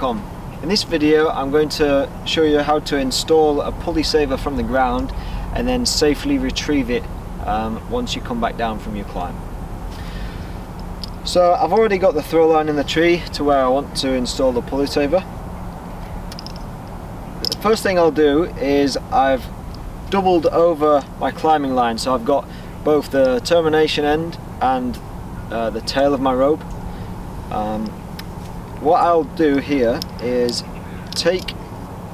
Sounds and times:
Speech: 0:00.0 - 0:09.4, 0:11.3 - 0:15.3, 0:17.5 - 0:19.5, 0:20.1 - 0:26.6, 0:27.5 - 0:28.0, 0:28.8 - 0:30.6, 0:31.2 - 0:31.6.

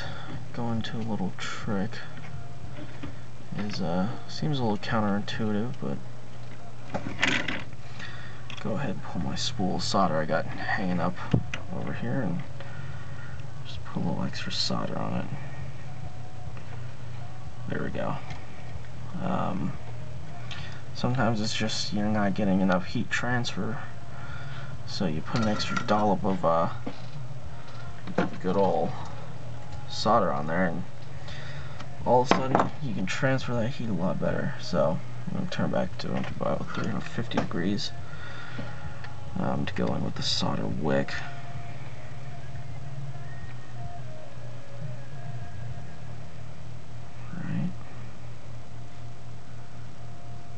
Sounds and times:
Speech: 0:00.6 - 0:02.1, 0:03.6 - 0:06.0, 0:08.6 - 0:12.4, 0:13.7 - 0:15.4, 0:19.2 - 0:19.8, 0:21.0 - 0:23.9, 0:24.9 - 0:26.8, 0:28.3 - 0:29.0, 0:29.9 - 0:30.8, 0:32.1 - 0:37.9, 0:39.4 - 0:41.3, 0:47.2 - 0:47.8.

